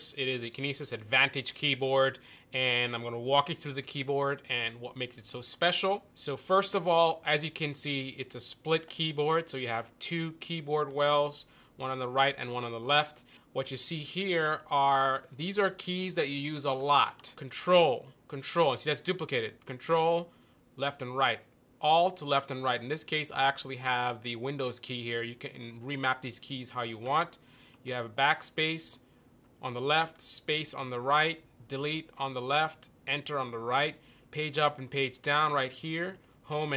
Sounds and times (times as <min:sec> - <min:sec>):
Speech: 0:00.0 - 0:29.0, 0:29.6 - 0:36.7.